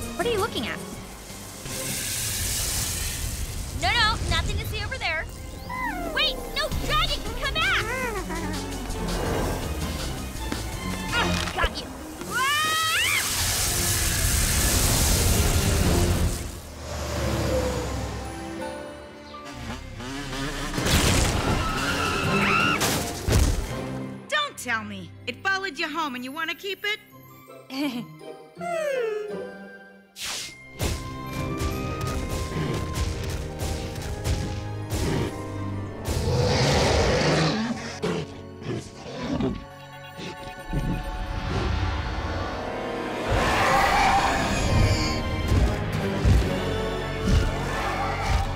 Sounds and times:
Music: 0:00.0 - 0:48.5.

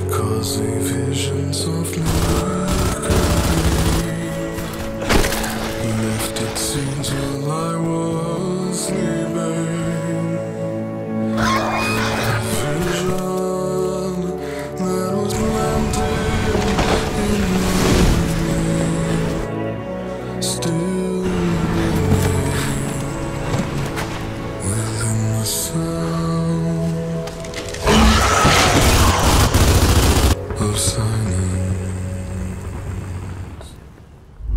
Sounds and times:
Music: 0:00.0 - 0:34.5.

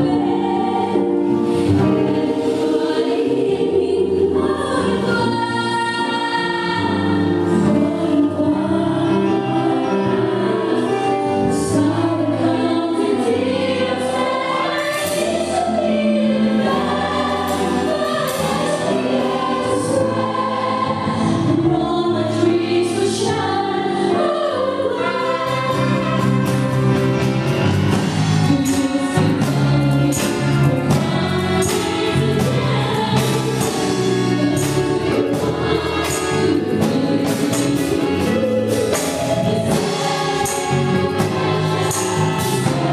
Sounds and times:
Choir: 0:00.0 - 0:42.9.

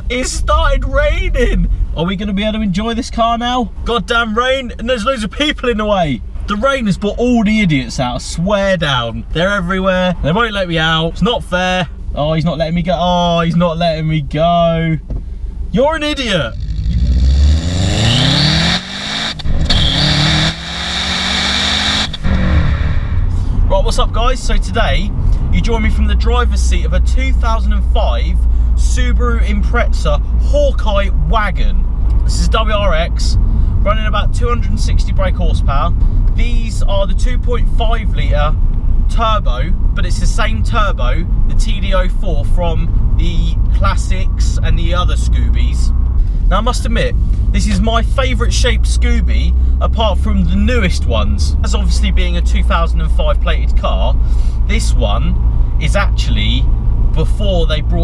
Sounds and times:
Car: 0:00.0 - 0:58.0
Accelerating, revving, vroom: 0:16.6 - 0:23.2.

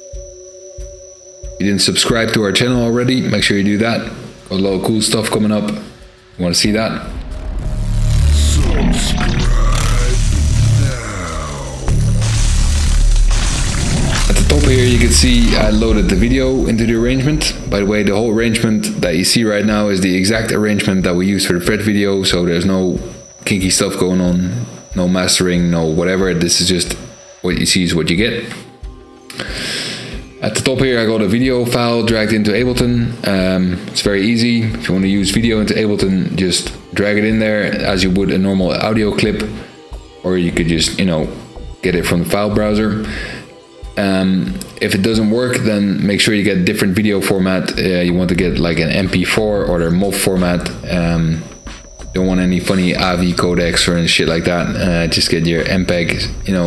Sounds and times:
Music: 0:00.0 - 0:56.6
Speech: 0:01.6 - 0:07.2, 0:14.3 - 0:28.6, 0:30.4 - 0:39.6, 0:40.2 - 0:43.1, 0:44.0 - 0:51.4, 0:52.2 - 0:56.6.

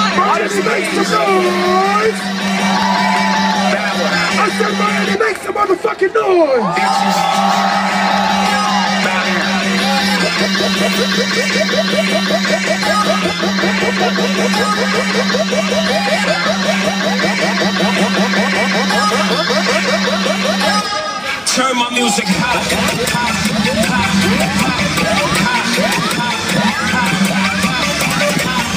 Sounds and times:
Soundtrack music: 0:00.0 - 0:05.8, 0:06.8 - 0:28.7.

